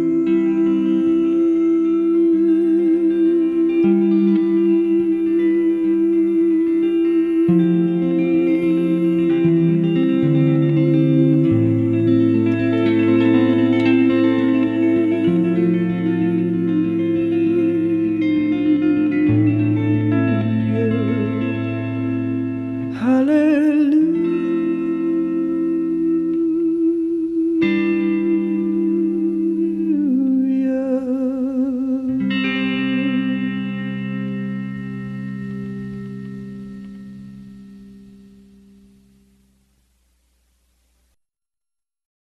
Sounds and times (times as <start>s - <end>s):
Music: 0.0s - 41.0s.